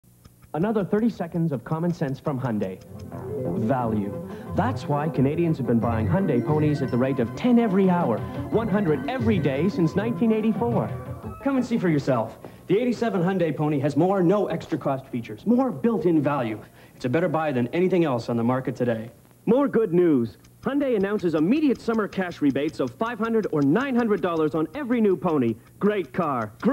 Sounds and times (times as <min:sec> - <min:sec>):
Speech: 0:00.6 - 0:02.8, 0:03.5 - 0:26.7
Music: 0:02.8 - 0:12.5.